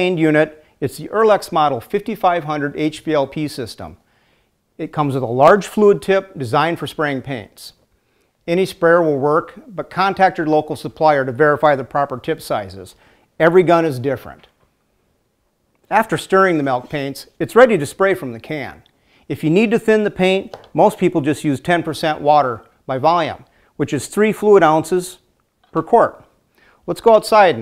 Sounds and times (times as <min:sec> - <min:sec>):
Speech: 0:00.0 - 0:04.0, 0:04.8 - 0:07.8, 0:08.5 - 0:14.5, 0:15.9 - 0:26.3, 0:26.9 - 0:27.6.